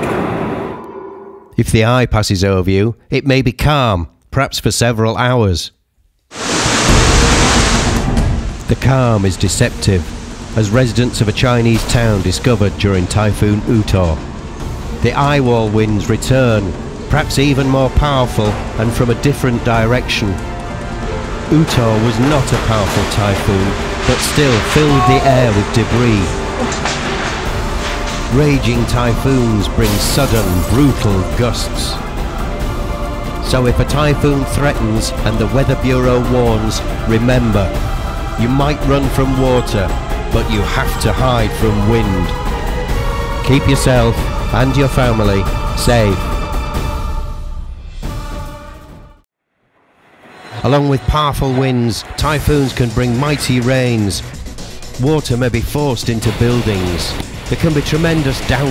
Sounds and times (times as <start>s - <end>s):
Speech: 1.6s - 5.8s, 8.7s - 14.2s, 15.0s - 20.4s, 21.5s - 26.8s, 28.3s - 32.0s, 33.4s - 37.8s, 38.4s - 42.3s, 43.4s - 46.3s, 50.6s - 54.3s, 55.0s - 58.7s
Music: 6.8s - 58.7s.